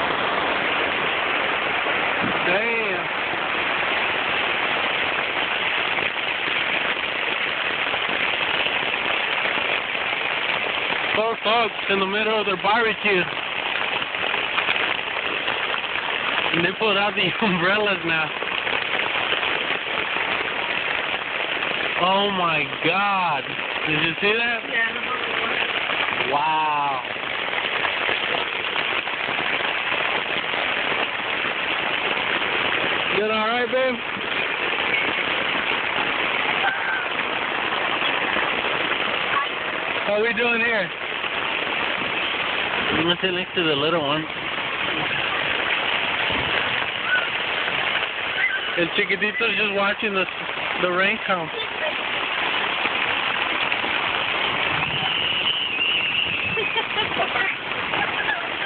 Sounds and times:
Rain on surface: 0.0s - 58.6s
Raindrop: 0.0s - 58.6s
Speech: 2.4s - 3.1s, 11.2s - 13.3s, 16.6s - 18.3s, 22.0s - 25.6s, 33.2s - 34.0s, 48.8s - 52.0s.

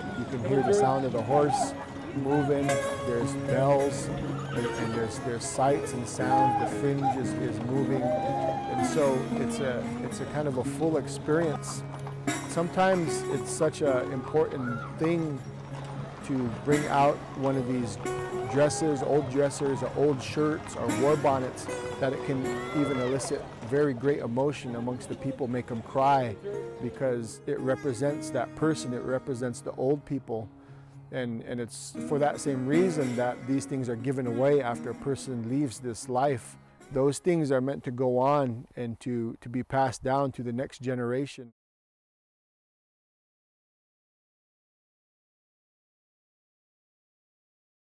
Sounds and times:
Speech: 0.0s - 11.8s, 12.5s - 15.4s, 16.2s - 30.5s, 31.1s - 41.5s
Music: 0.0s - 38.5s.

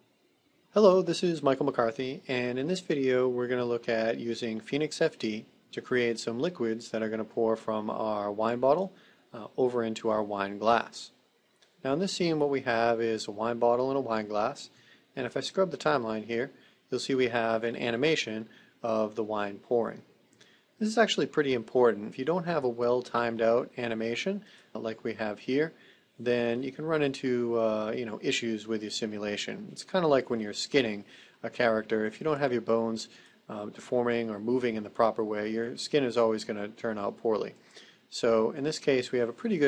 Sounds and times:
Speech: 0.8s - 11.2s, 11.8s - 20.1s, 20.8s - 39.6s.

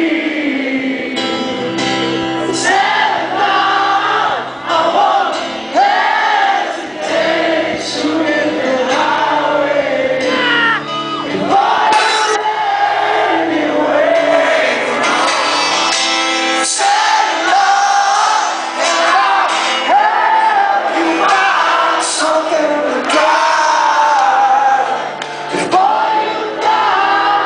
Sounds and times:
Music: 0.0s - 27.4s.

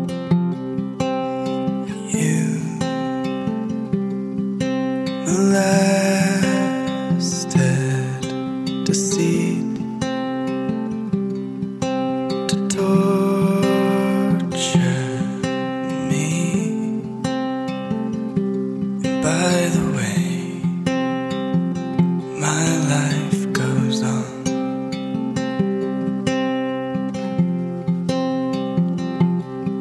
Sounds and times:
Music: 0.0s - 29.8s.

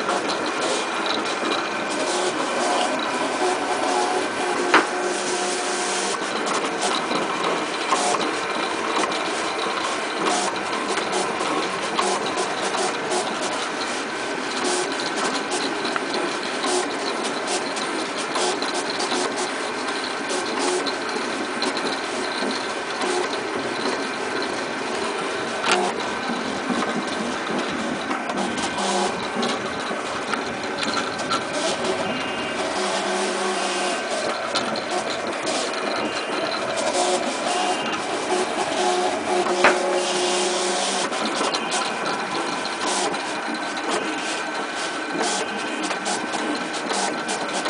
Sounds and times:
Printer: 0.0s - 47.6s.

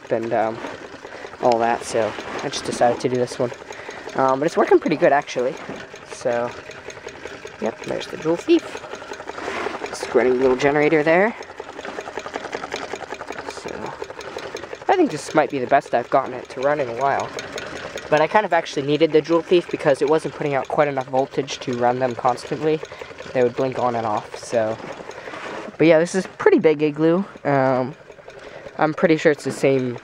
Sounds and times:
Speech: 0.0s - 0.6s, 1.4s - 3.6s, 4.2s - 6.6s, 7.6s - 8.7s, 10.0s - 11.4s, 13.5s - 14.0s, 14.9s - 17.3s, 18.1s - 24.8s, 25.8s - 28.0s, 28.8s - 30.0s.

